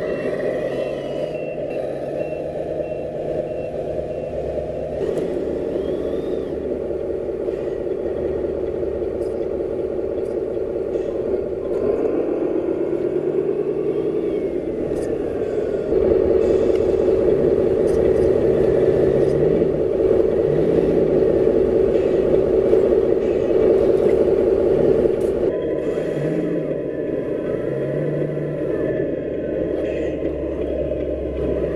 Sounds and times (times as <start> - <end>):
Truck: 0.0 - 31.7.